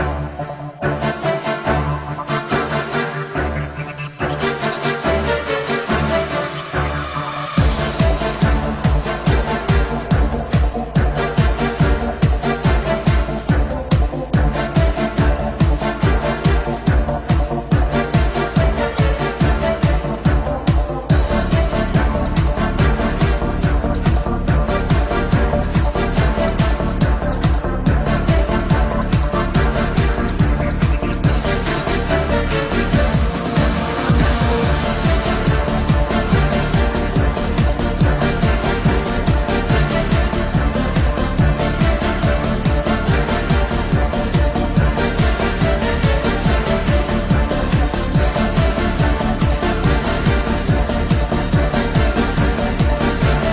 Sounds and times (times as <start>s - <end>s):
Techno: 0.0s - 53.5s.